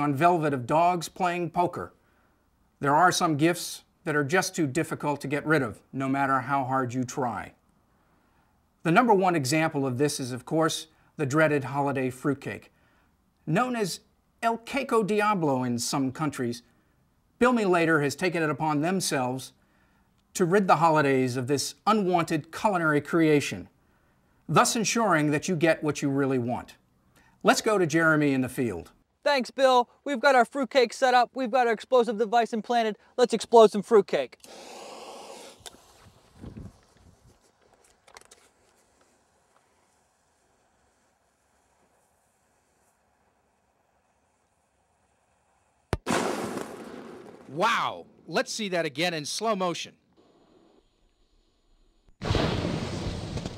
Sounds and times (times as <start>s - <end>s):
Speech: 0.0s - 1.9s, 2.8s - 7.6s, 8.9s - 12.7s, 13.5s - 16.6s, 17.4s - 19.6s, 20.4s - 23.7s, 24.5s - 26.8s, 27.4s - 34.4s, 47.5s - 50.0s.